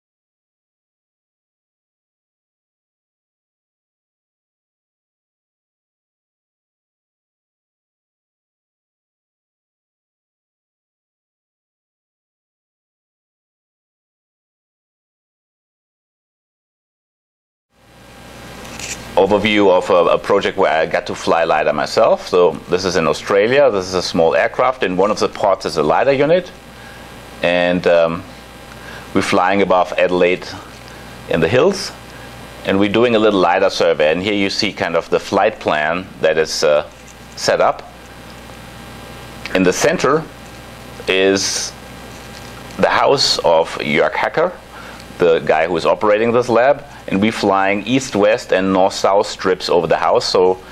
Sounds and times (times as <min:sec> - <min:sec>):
Speech: 0:19.2 - 0:26.6, 0:27.4 - 0:28.3, 0:29.1 - 0:30.7, 0:31.3 - 0:32.0, 0:32.6 - 0:38.0, 0:39.5 - 0:40.4, 0:41.0 - 0:41.8, 0:42.8 - 0:44.6, 0:45.2 - 0:50.7.